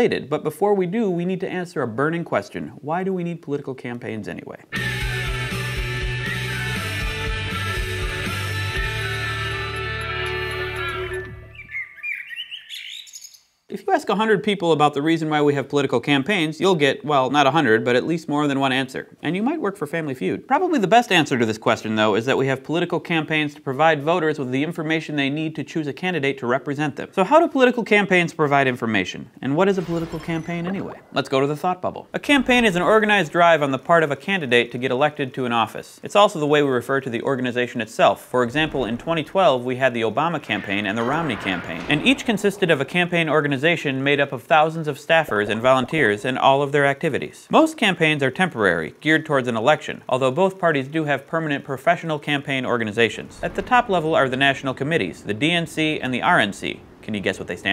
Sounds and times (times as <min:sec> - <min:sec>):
Speech: 0:00.0 - 0:04.7, 0:13.7 - 0:57.7
Music: 0:04.7 - 0:11.7.